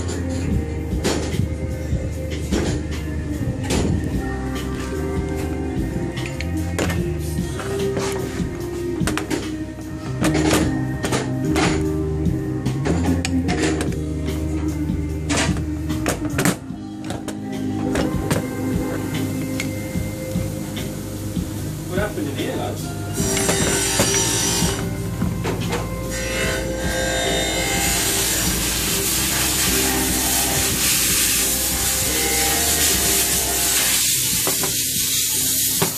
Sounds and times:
Music: 0.0 - 35.9.

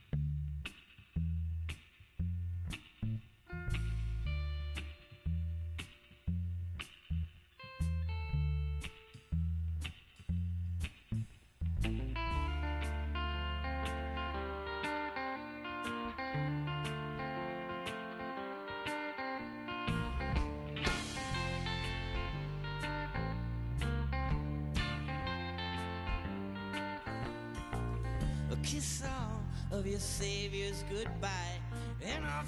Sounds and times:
Music: 0.0 - 32.4.

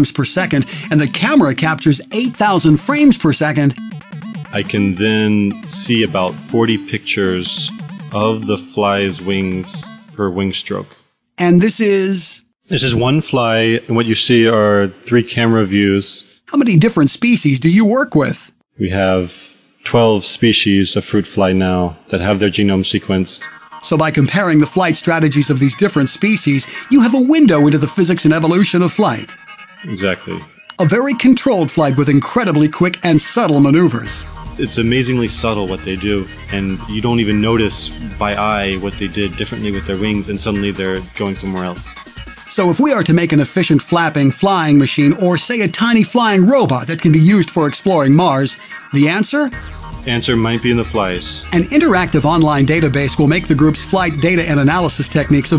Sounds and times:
Speech synthesizer: 0.0 - 3.8, 4.6 - 55.5
Music: 0.0 - 10.9, 22.3 - 55.5.

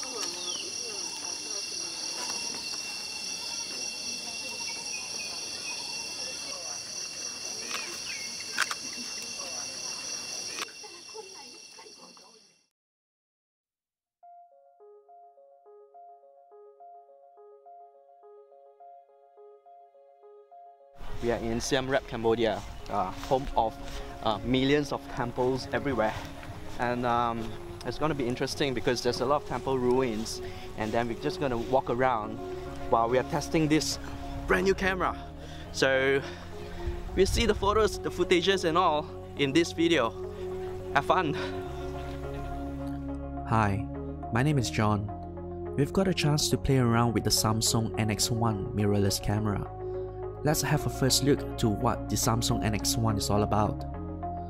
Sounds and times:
Environmental noise: 0.0 - 12.6, 21.0 - 43.2
Camera: 8.5 - 8.8.

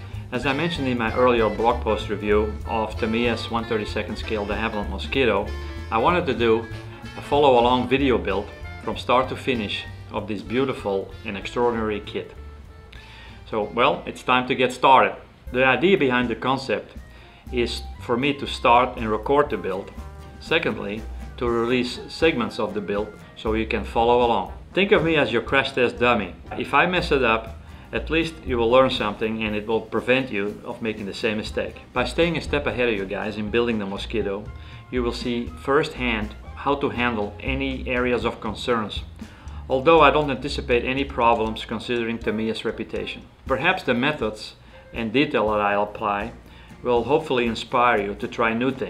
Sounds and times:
Music: 0.0 - 48.8
Speech: 0.3 - 12.4, 13.5 - 39.1, 39.7 - 48.8.

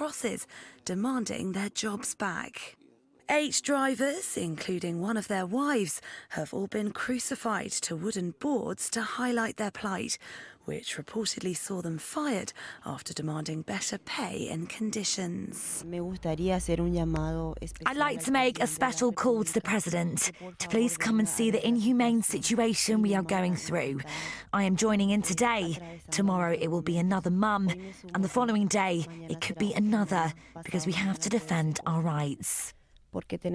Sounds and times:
Speech: 0.0 - 33.5.

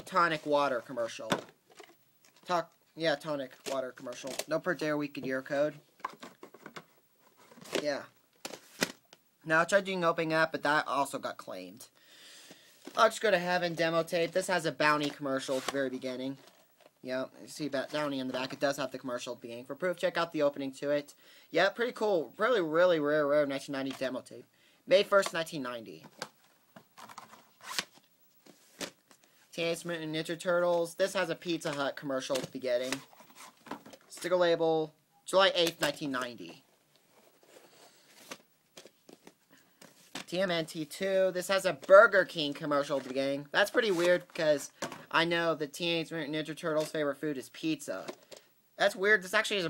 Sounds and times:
Speech: 0.0 - 1.4, 2.4 - 5.8, 7.7 - 8.2, 9.4 - 11.9, 12.9 - 16.4, 17.0 - 26.1, 29.5 - 33.1, 34.1 - 36.6, 40.3 - 48.2, 48.8 - 49.6.

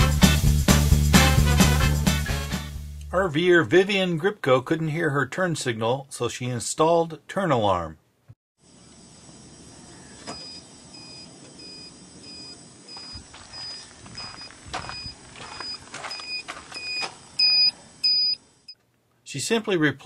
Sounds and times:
Speech: 3.1 - 8.0, 19.2 - 20.0.

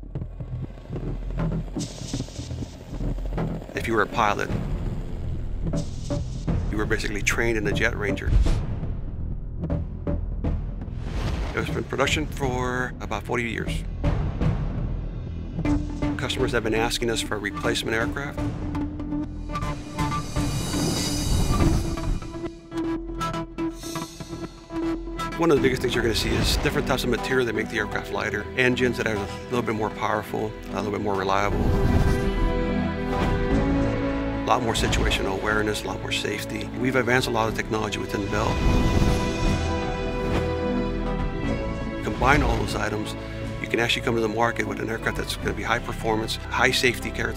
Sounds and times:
Music: 0.0 - 47.3
Speech: 3.8 - 4.6, 6.7 - 8.4, 11.6 - 13.9, 16.2 - 18.4, 25.3 - 31.6, 34.5 - 38.6, 42.0 - 47.3.

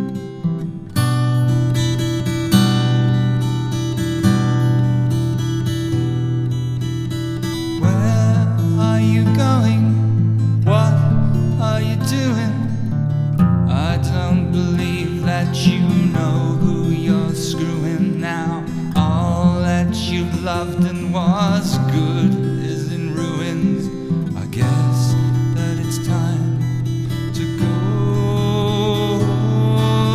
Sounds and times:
Music: 0.0 - 30.1.

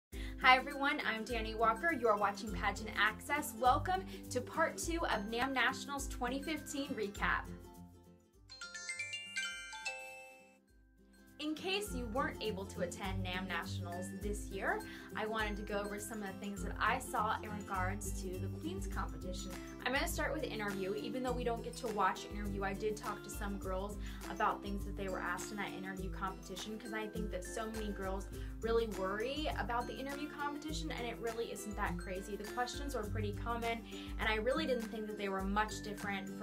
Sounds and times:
Speech: 0.4 - 7.5, 11.4 - 36.4
Glockenspiel: 8.5 - 21.8.

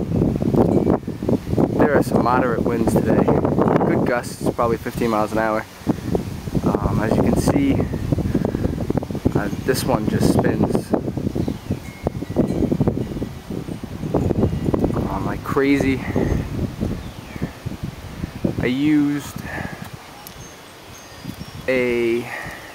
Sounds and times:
Wind: 0.0 - 22.7
Speech: 1.8 - 5.7, 6.6 - 7.9, 9.4 - 10.9, 15.0 - 16.1, 18.6 - 19.4, 21.7 - 22.4.

